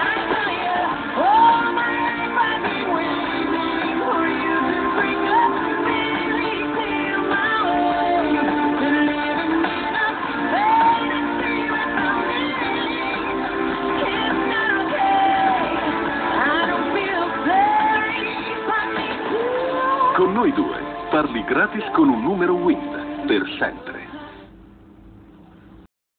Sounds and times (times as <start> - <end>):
Music: 0.0 - 24.6
Speech: 20.2 - 24.2.